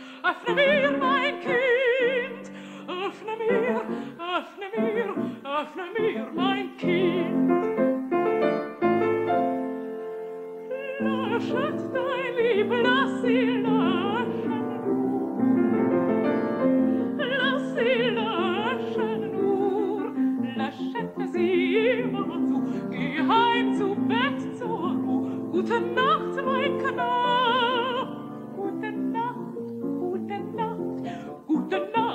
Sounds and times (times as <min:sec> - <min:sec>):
Singing: 0:00.0 - 0:07.7, 0:10.7 - 0:15.5, 0:17.1 - 0:32.1
Opera: 0:00.0 - 0:32.1.